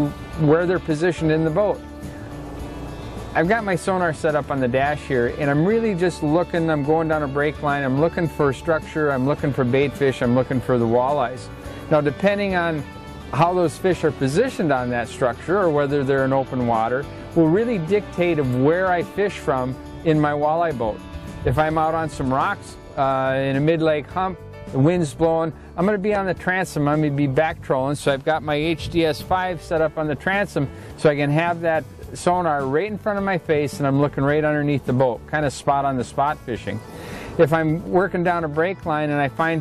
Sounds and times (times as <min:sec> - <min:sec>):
Speech: 0:00.0 - 0:01.8, 0:03.4 - 0:12.8, 0:13.4 - 0:36.8, 0:37.4 - 0:39.6
Music: 0:00.0 - 0:39.6.